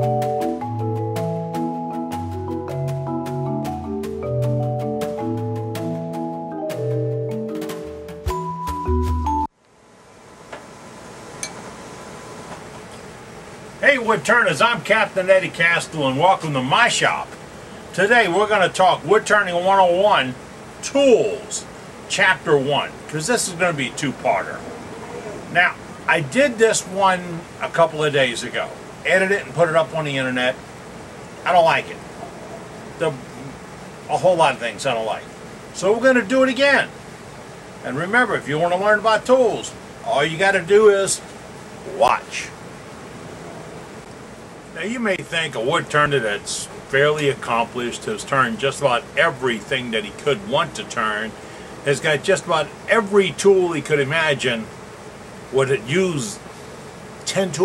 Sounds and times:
Speech: 0:13.8 - 0:24.6, 0:25.5 - 0:30.6, 0:31.4 - 0:32.0, 0:33.0 - 0:36.9, 0:37.8 - 0:41.2, 0:41.9 - 0:42.6, 0:44.8 - 0:54.7, 0:55.5 - 0:56.4, 0:57.2 - 0:57.6.

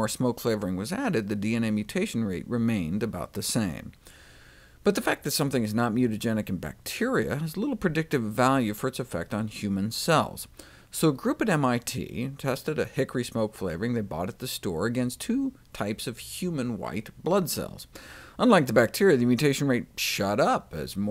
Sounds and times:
Speech: 0:00.0 - 0:04.0, 0:04.8 - 0:21.1.

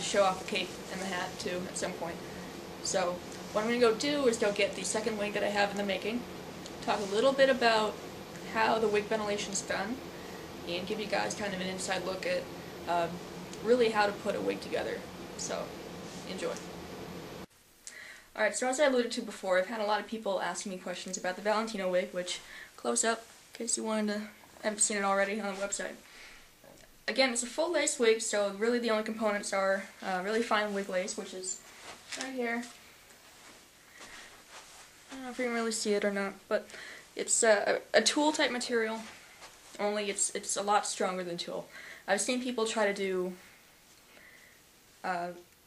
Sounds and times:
Speech: 0:00.0 - 0:02.2, 0:02.8 - 0:10.0, 0:10.7 - 0:16.7, 0:18.4 - 0:26.0, 0:27.1 - 0:32.7, 0:35.1 - 0:39.1, 0:39.8 - 0:43.4, 0:45.0 - 0:45.5.

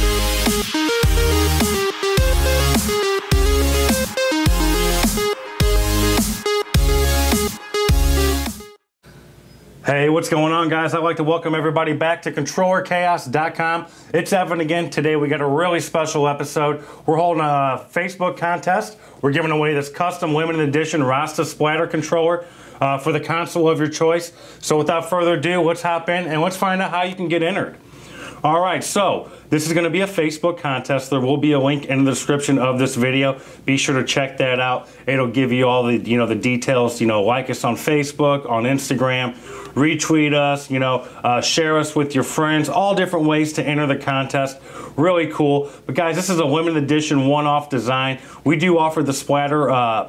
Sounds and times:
Speech: 0:09.8 - 0:27.8, 0:28.4 - 0:50.0.

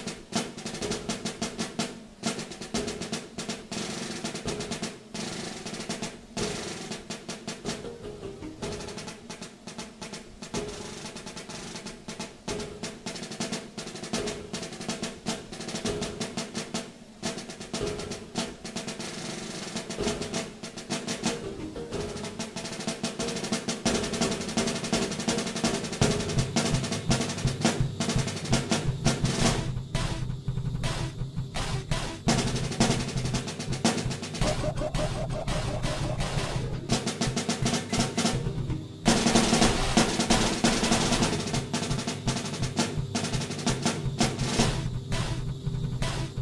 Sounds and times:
Drum roll: 0:00.0 - 0:46.4.

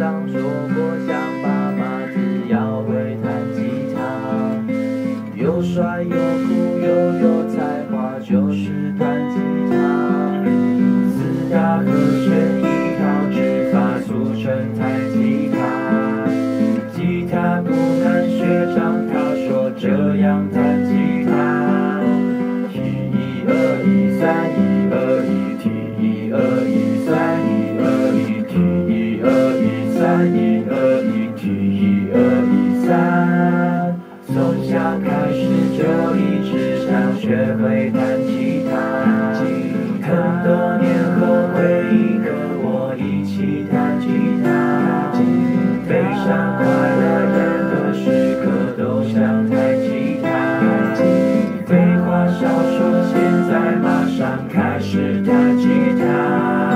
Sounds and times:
Strum: 0:00.0 - 0:56.7.

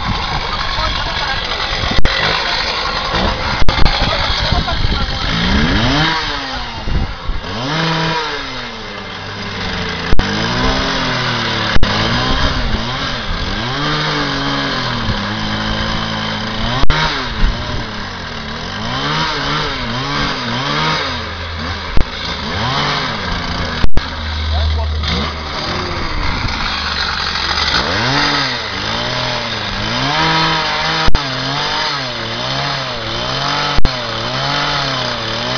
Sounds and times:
Chainsaw: 0:00.0 - 0:35.5
Speech: 0:24.5 - 0:25.0.

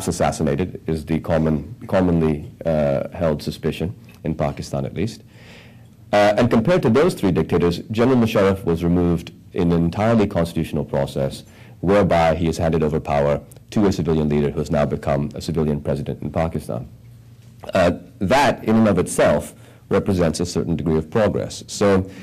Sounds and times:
Male speech, man speaking: 0:00.0 - 0:05.2, 0:06.2 - 0:16.9, 0:17.7 - 0:22.1
Narration, monologue: 0:00.0 - 0:22.2.

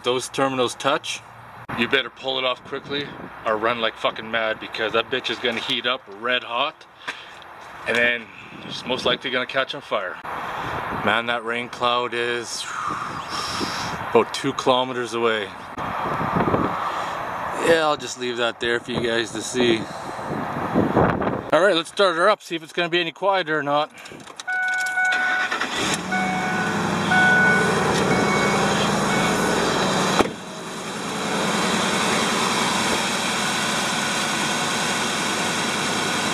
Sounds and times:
Car: 0:12.6 - 0:21.5, 0:23.9 - 0:36.3.

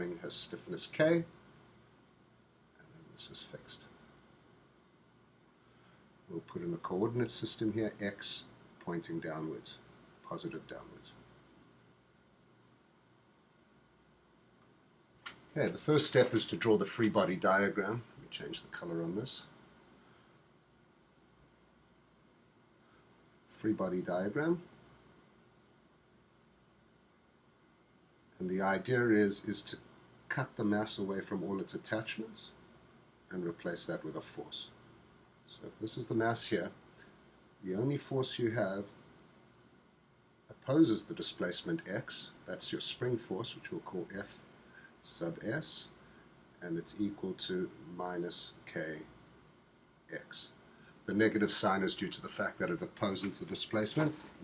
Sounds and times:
Speech: 0:00.0 - 0:01.4, 0:02.8 - 0:04.0, 0:06.3 - 0:11.3, 0:15.3 - 0:19.6, 0:23.5 - 0:24.7, 0:28.4 - 0:32.6, 0:33.3 - 0:34.8, 0:35.5 - 0:36.8, 0:37.6 - 0:39.1, 0:40.5 - 0:46.0, 0:46.6 - 0:49.2, 0:50.1 - 0:54.4.

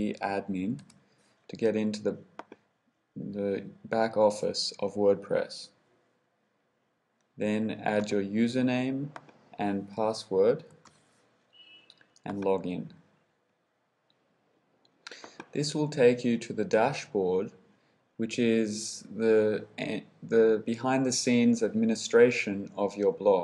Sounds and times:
Speech: 0:00.0 - 0:00.9, 0:01.5 - 0:02.3, 0:03.2 - 0:05.8, 0:07.4 - 0:10.7, 0:12.2 - 0:13.0, 0:15.5 - 0:17.6, 0:18.2 - 0:23.4.

